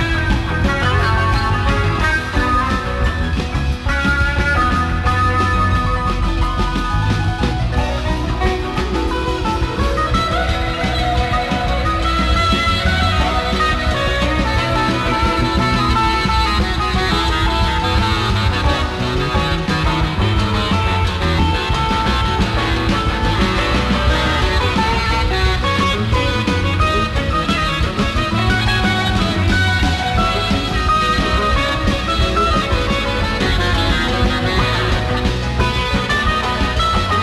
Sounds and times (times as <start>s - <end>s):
Inside, large room or hall: 0.0s - 37.2s
Inside, public space: 0.0s - 37.2s
Music: 0.0s - 37.2s.